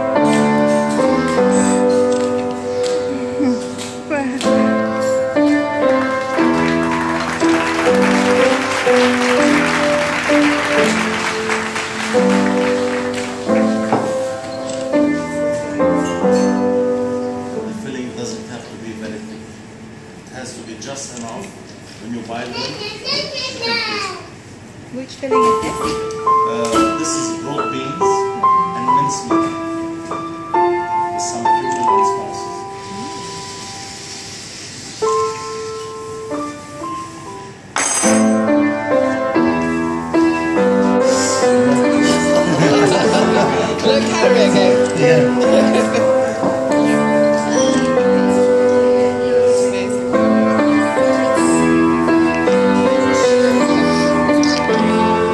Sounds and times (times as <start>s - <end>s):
Music: 0.0s - 19.2s, 25.3s - 55.3s.